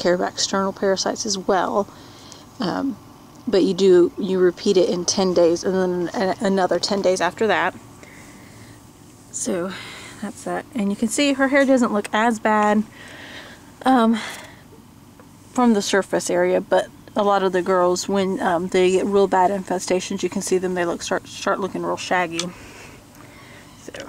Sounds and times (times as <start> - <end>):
Speech: 0.0 - 1.9, 2.6 - 7.8, 9.3 - 12.9, 13.8 - 14.4, 15.6 - 22.6, 23.8 - 24.0.